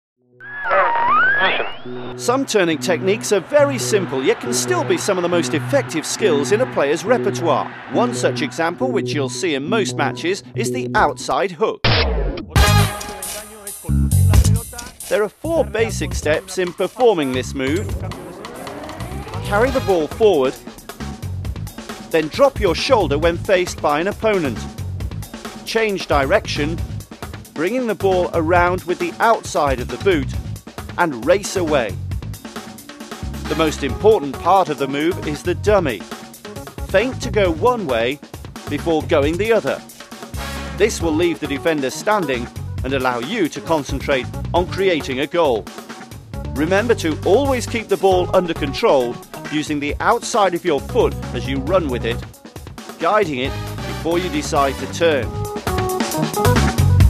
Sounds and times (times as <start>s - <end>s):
Music: 0.2s - 57.0s
Speech: 0.6s - 11.8s, 13.3s - 18.2s, 19.4s - 20.8s, 22.2s - 24.7s, 25.7s - 26.8s, 27.6s - 30.4s, 31.0s - 32.0s, 33.5s - 36.0s, 36.9s - 39.8s, 40.8s - 45.7s, 46.6s - 52.3s, 53.0s - 55.3s.